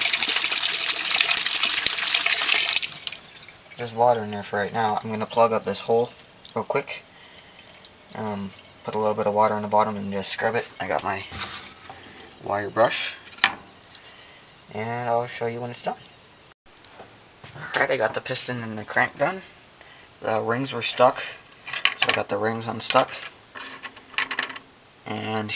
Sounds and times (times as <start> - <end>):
Speech: 3.8 - 7.0, 8.2 - 11.4, 12.4 - 13.2, 14.7 - 16.0, 17.6 - 19.5, 20.2 - 21.4, 22.1 - 23.3, 25.1 - 25.5.